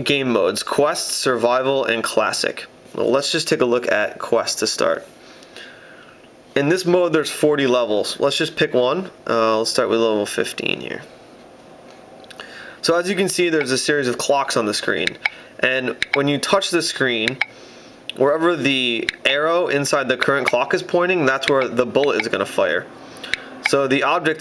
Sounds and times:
Speech: 0.0 - 5.1, 6.6 - 11.1, 12.8 - 17.4, 18.1 - 22.9, 23.7 - 24.4.

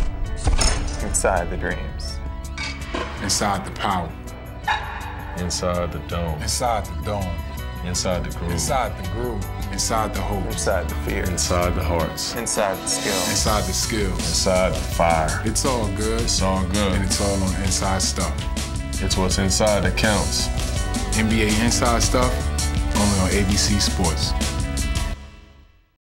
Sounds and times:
Music: 0.0 - 26.0
Speech: 1.0 - 2.2, 3.2 - 4.2, 5.4 - 18.4, 19.0 - 20.5, 21.1 - 24.4.

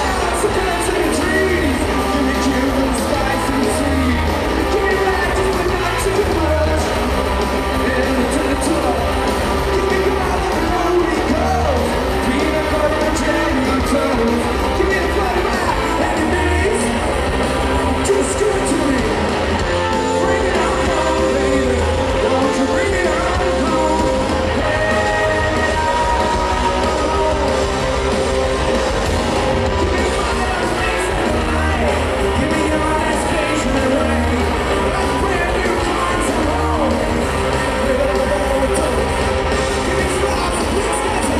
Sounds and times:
Heavy metal: 0.0 - 41.3
Singing: 17.9 - 28.5, 29.7 - 41.3.

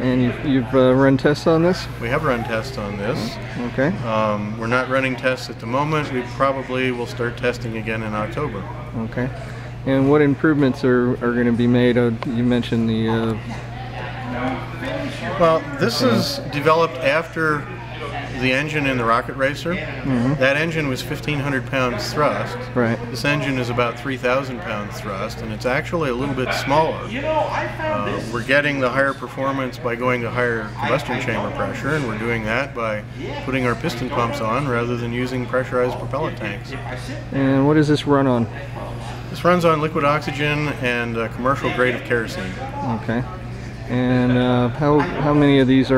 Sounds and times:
Speech: 0.0 - 45.9.

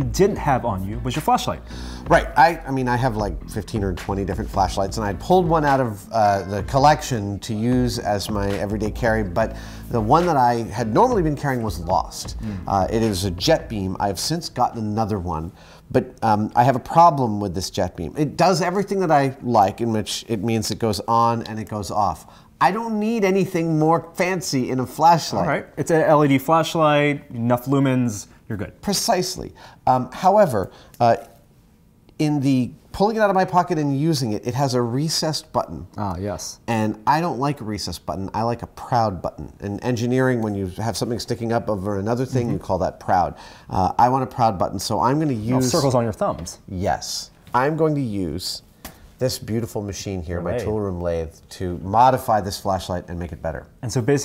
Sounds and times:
Speech: 0.0 - 31.4, 32.2 - 48.6, 49.2 - 54.2.

